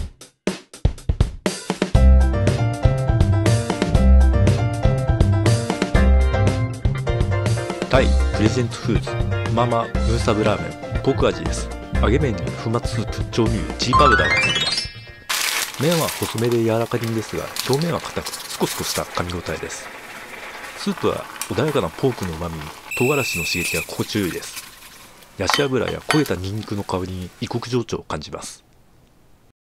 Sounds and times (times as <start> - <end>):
Speech: 7.9 - 14.4, 15.8 - 19.8, 20.8 - 24.6, 25.4 - 28.6.